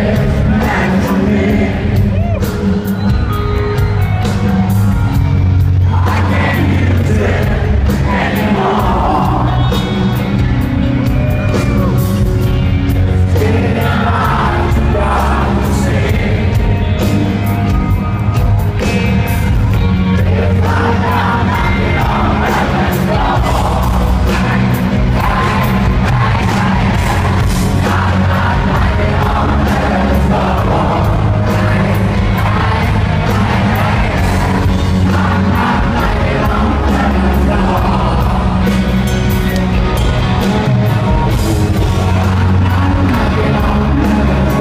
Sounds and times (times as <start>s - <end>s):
Music: 0.0s - 44.6s.